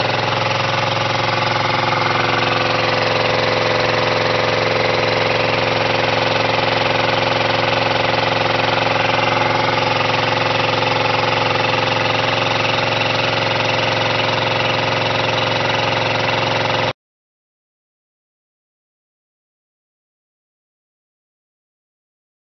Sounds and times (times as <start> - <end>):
Engine: 0.0 - 17.0.